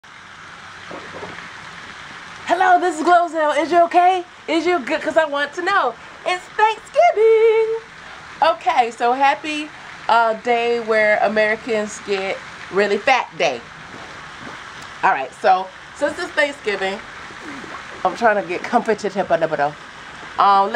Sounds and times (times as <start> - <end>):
Speech: 2.5 - 7.8, 8.4 - 13.6, 15.0 - 19.8, 20.4 - 20.7.